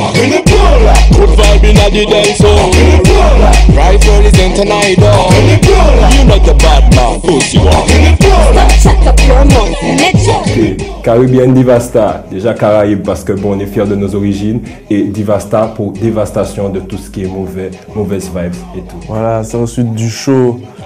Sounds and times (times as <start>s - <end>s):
Music: 0.0s - 20.8s
Speech: 11.1s - 20.7s.